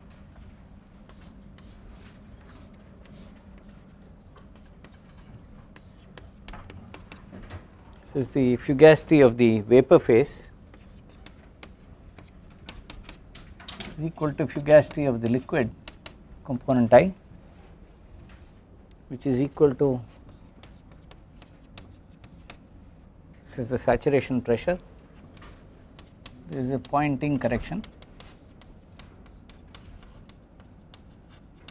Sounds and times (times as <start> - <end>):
Speech: 8.1 - 10.5, 14.0 - 15.8, 16.5 - 17.2, 19.1 - 20.1, 23.5 - 24.8, 26.5 - 27.9.